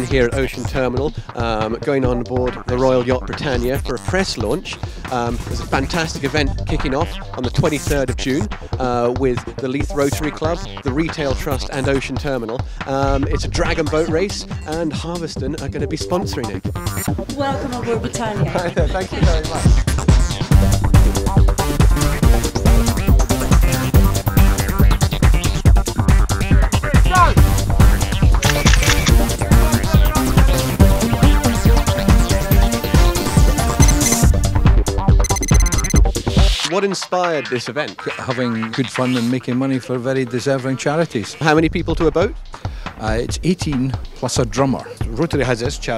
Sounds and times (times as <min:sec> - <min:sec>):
Speech: 0:00.0 - 0:16.6, 0:17.4 - 0:19.7, 0:27.0 - 0:27.4, 0:36.6 - 0:42.4, 0:43.0 - 0:45.9
Music: 0:00.0 - 0:45.9.